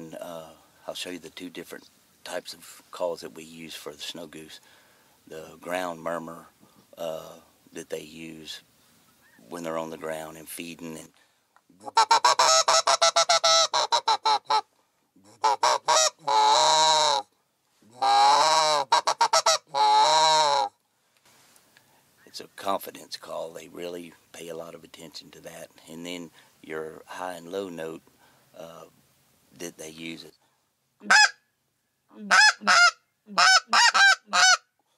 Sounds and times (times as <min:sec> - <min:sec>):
Speech: 0:00.0 - 0:04.6, 0:05.3 - 0:08.6, 0:09.5 - 0:11.1, 0:22.3 - 0:28.0, 0:29.6 - 0:30.4.